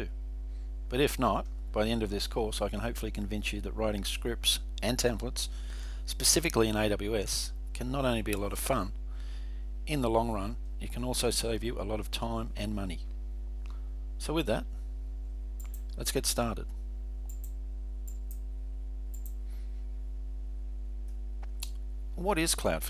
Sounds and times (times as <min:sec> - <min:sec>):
Speech: 0:00.9 - 0:05.5, 0:06.1 - 0:09.0, 0:09.9 - 0:13.1, 0:14.2 - 0:14.7, 0:16.0 - 0:16.7, 0:22.2 - 0:22.9.